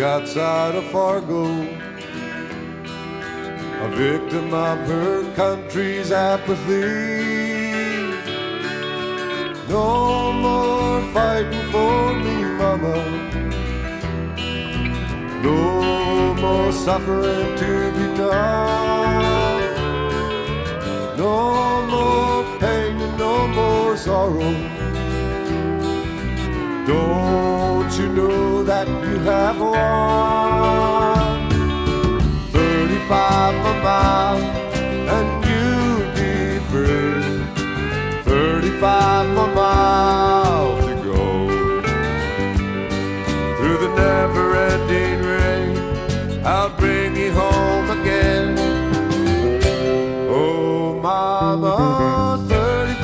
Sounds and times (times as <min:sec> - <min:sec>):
Music: 0:00.0 - 0:53.0.